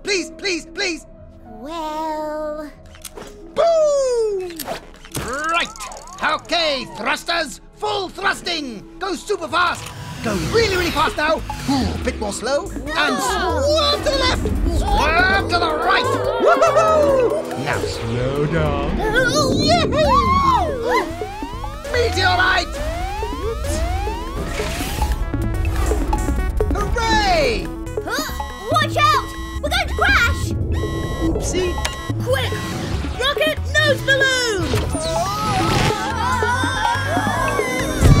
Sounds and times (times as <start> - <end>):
Music: 0.0 - 38.2.